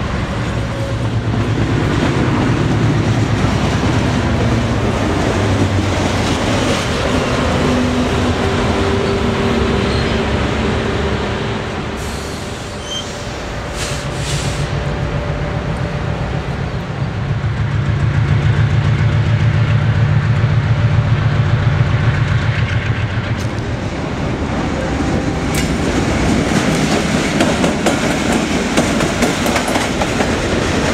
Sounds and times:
Railroad car, train wagon: 0:00.0 - 0:30.9
Train: 0:00.0 - 0:30.9.

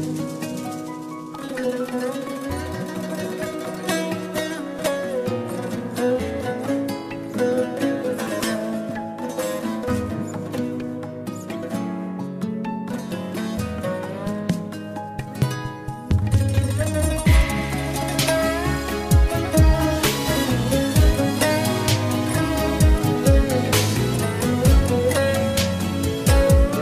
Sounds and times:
Music: 0:00.0 - 0:26.8.

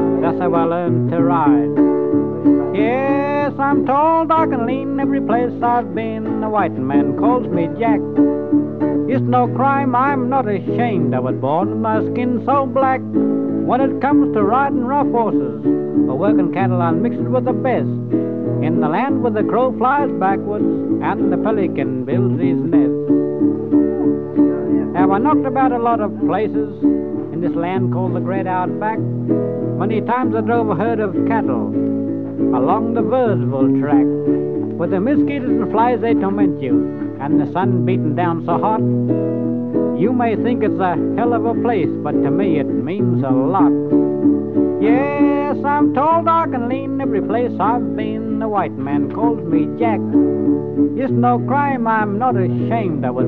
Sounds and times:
Music: 0:00.0 - 0:53.2
Speech: 0:00.2 - 0:01.7, 0:02.8 - 0:08.0, 0:09.1 - 0:13.0, 0:13.7 - 0:18.0, 0:18.6 - 0:23.0, 0:24.8 - 0:29.0, 0:29.8 - 0:31.8, 0:32.6 - 0:34.1, 0:34.8 - 0:38.8, 0:40.0 - 0:43.8, 0:44.8 - 0:50.1, 0:51.0 - 0:53.2.

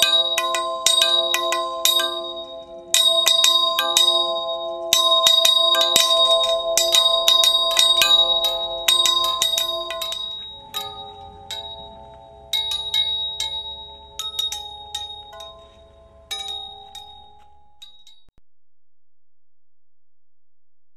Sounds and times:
Tubular bells: 0:00.0 - 0:18.3.

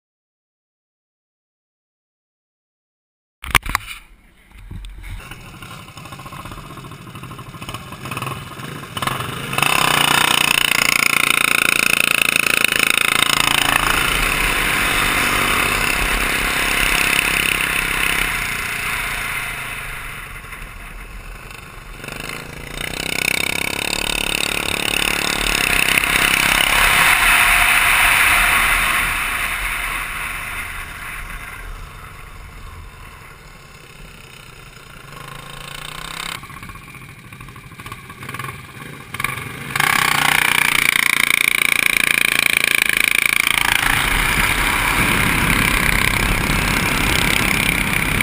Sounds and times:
Bicycle: 0:03.5 - 0:48.2.

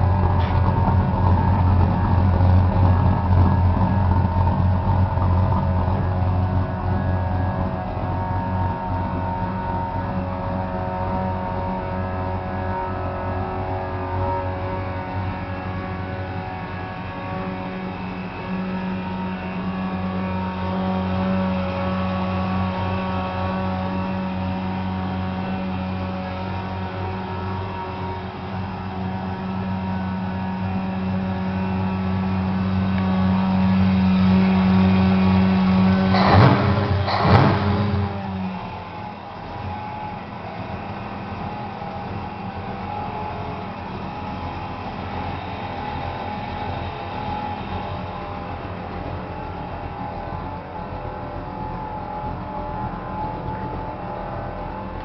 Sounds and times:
Car: 0:00.0 - 0:55.0.

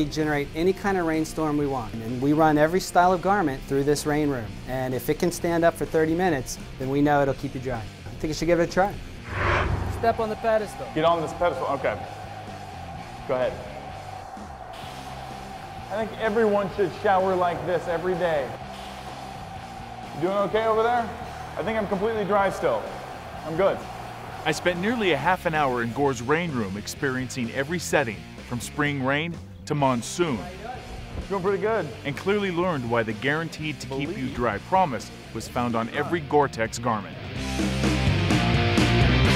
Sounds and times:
Speech: 0:00.0 - 0:09.0, 0:10.0 - 0:12.0, 0:15.9 - 0:18.6, 0:20.2 - 0:22.9, 0:24.5 - 0:37.2
Music: 0:00.0 - 0:39.3.

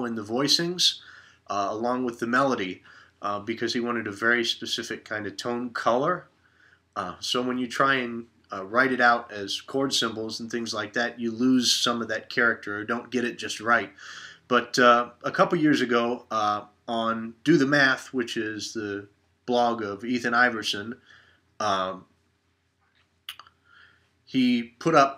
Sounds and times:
Speech: 0:00.0 - 0:06.3, 0:07.0 - 0:21.0, 0:21.6 - 0:22.1, 0:24.3 - 0:25.1.

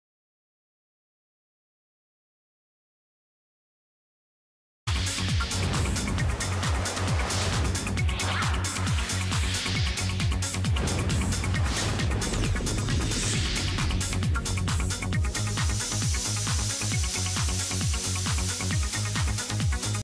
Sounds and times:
Music: 0:04.9 - 0:20.0
Spray: 0:05.0 - 0:20.0.

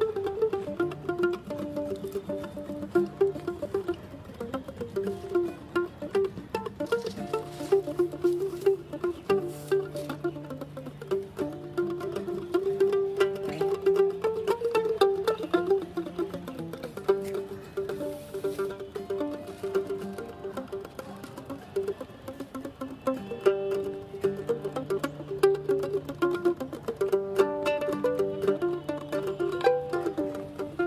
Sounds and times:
Mandolin: 0:00.0 - 0:30.8.

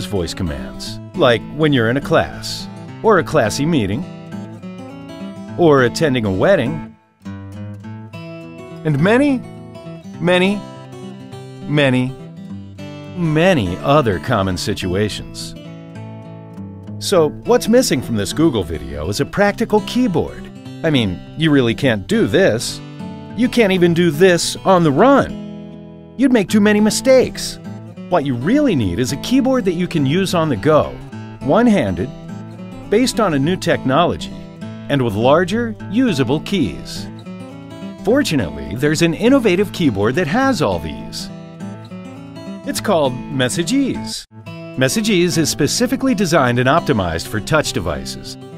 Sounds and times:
Speech: 0:00.0 - 0:04.1, 0:05.6 - 0:06.9, 0:08.8 - 0:09.4, 0:10.2 - 0:10.6, 0:11.6 - 0:12.2, 0:13.2 - 0:15.6, 0:17.0 - 0:22.8, 0:23.4 - 0:25.4, 0:26.2 - 0:32.2, 0:32.9 - 0:37.1, 0:38.0 - 0:41.3, 0:42.7 - 0:48.4
Music: 0:00.0 - 0:48.5.

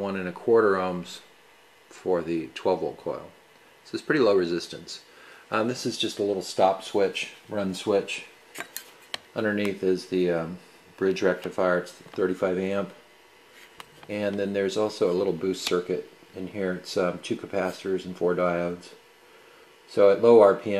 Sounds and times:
Speech: 0:00.0 - 0:01.3, 0:01.9 - 0:08.4, 0:09.3 - 0:13.0, 0:14.1 - 0:19.0, 0:19.9 - 0:20.7.

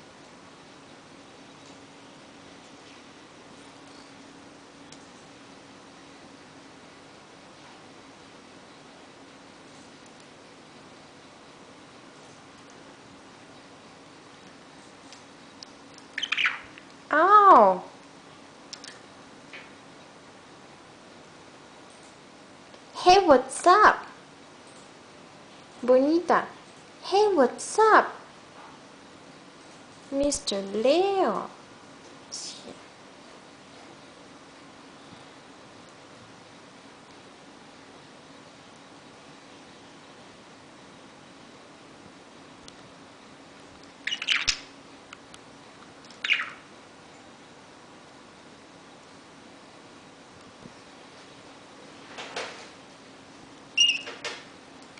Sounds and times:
Speech: 0:17.1 - 0:18.0, 0:23.0 - 0:24.2, 0:25.8 - 0:28.2, 0:30.1 - 0:31.6, 0:32.3 - 0:32.9.

